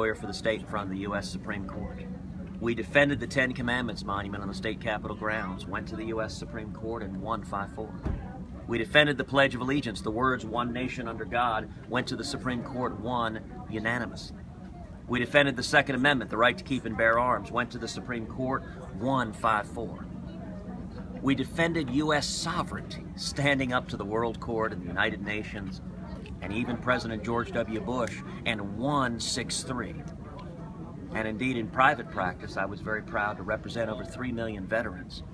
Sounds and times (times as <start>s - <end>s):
Speech: 0.0s - 20.1s, 21.2s - 35.3s.